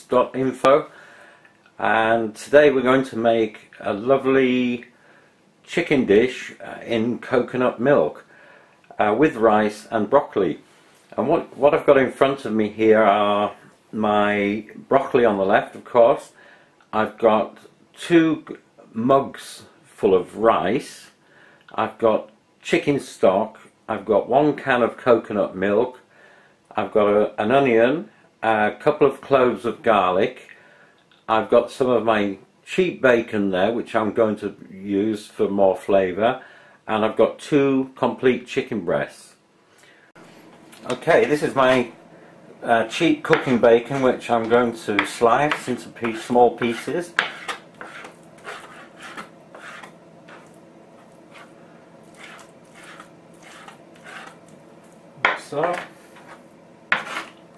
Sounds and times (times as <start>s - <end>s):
Speech: 0.0s - 1.0s, 1.8s - 4.9s, 5.7s - 8.3s, 8.9s - 26.1s, 26.7s - 30.6s, 31.2s - 39.4s, 40.8s - 42.0s, 42.6s - 47.2s, 55.2s - 55.9s.